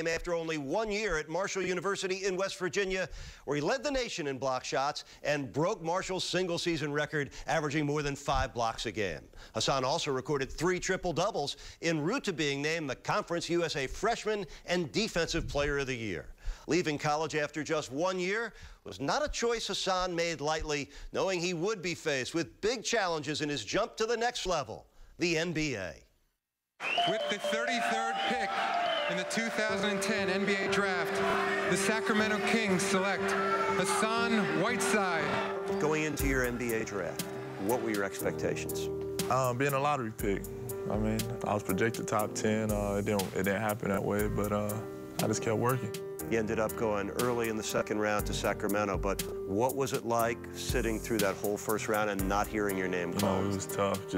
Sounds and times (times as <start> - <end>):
Speech: 0.0 - 26.1, 29.1 - 54.1.